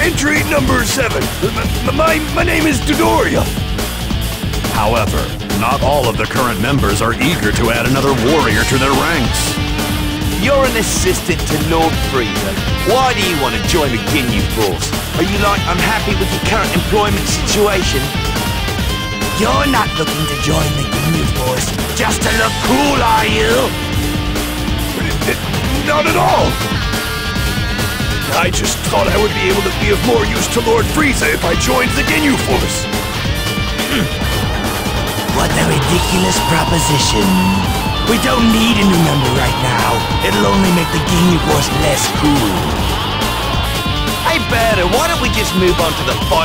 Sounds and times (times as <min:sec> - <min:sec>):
Speech: 0:00.0 - 0:03.6, 0:04.7 - 0:09.6, 0:10.4 - 0:18.1, 0:19.3 - 0:23.7, 0:25.0 - 0:26.6, 0:28.3 - 0:32.8, 0:35.3 - 0:42.7, 0:44.2 - 0:46.4
Music: 0:00.0 - 0:46.4.